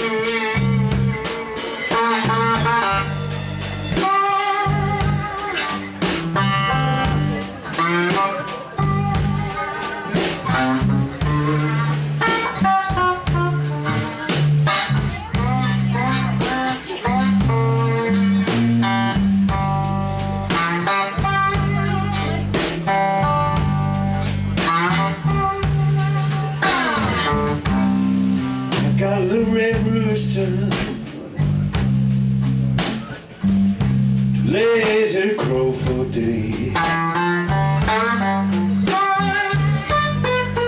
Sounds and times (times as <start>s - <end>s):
Music: 0.0s - 40.6s
Speech: 6.7s - 19.2s, 20.8s - 25.3s, 28.7s - 31.9s, 34.4s - 37.0s.